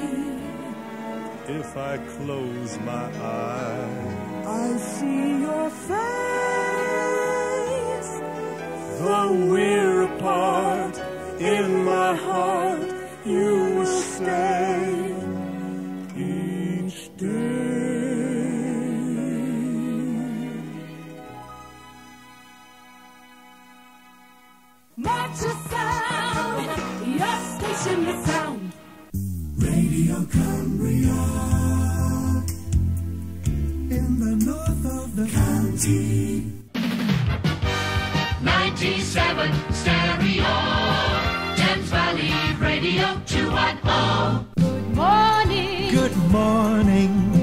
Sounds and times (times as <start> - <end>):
Rhythm and blues: 24.8 - 47.4.